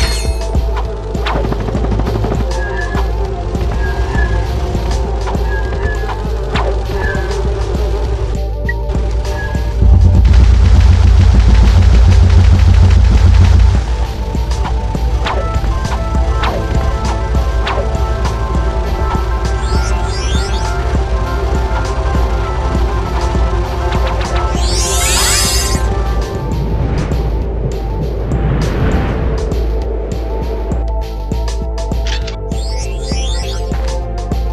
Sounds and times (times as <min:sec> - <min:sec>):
Music: 0:00.0 - 0:34.5.